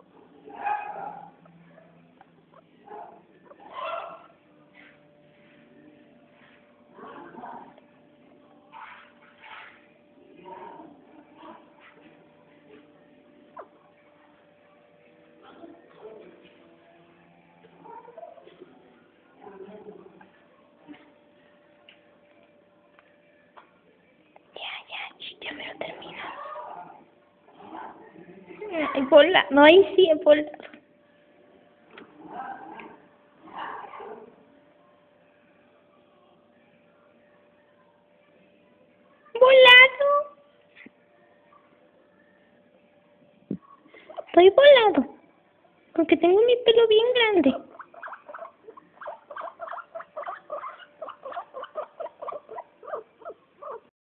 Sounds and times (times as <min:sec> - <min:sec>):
Dog: 0:00.5 - 0:02.1, 0:02.9 - 0:04.4, 0:47.7 - 0:53.9
Speech: 0:44.3 - 0:45.2, 0:46.0 - 0:47.7.